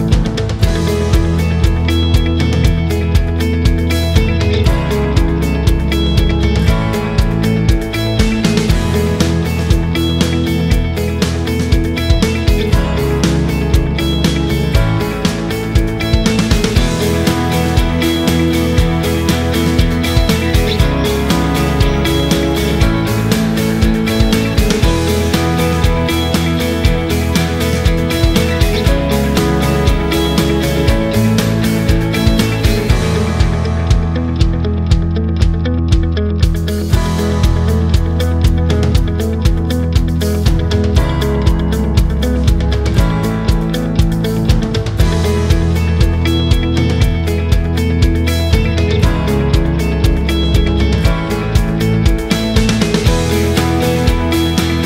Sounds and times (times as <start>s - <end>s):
Music: 0.0s - 54.8s.